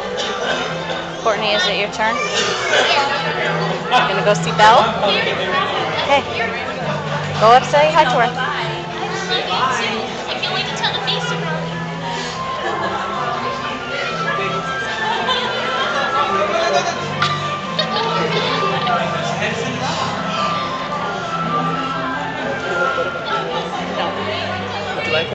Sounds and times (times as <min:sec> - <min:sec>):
Music: 0:00.0 - 0:25.3.